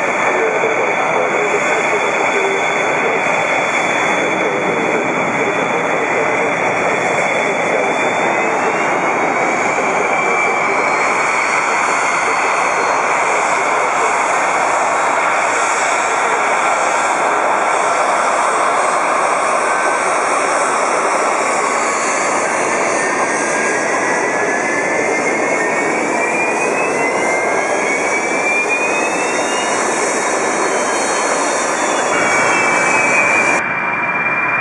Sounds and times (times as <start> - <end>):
Fixed-wing aircraft, airplane: 0.0 - 34.6
Jet engine: 0.0 - 34.6.